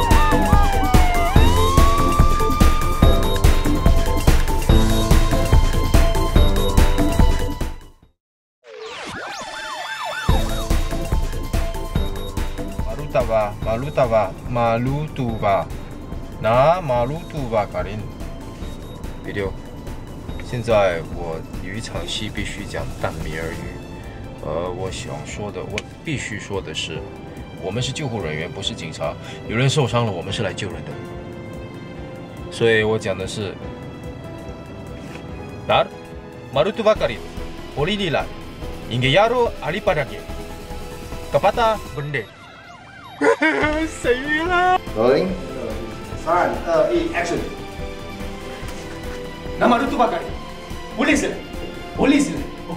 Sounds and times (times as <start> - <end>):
Music: 0.0 - 8.2, 8.8 - 52.7.